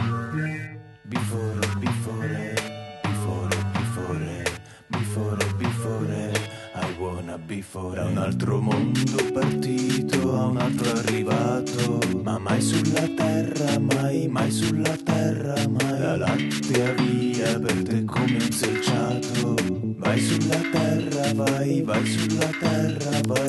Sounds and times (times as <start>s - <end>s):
Background music: 0.0s - 23.4s
Soul music: 0.0s - 23.4s.